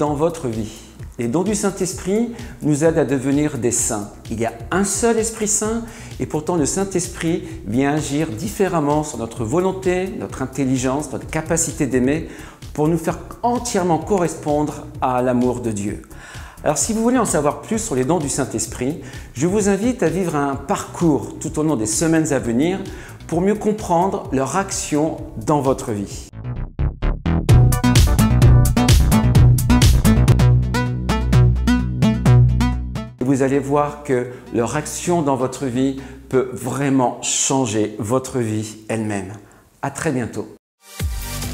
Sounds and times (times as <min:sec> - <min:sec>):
Speech: 0:00.0 - 0:26.3, 0:33.2 - 0:40.6
Music: 0:00.0 - 0:37.2, 0:40.8 - 0:41.5.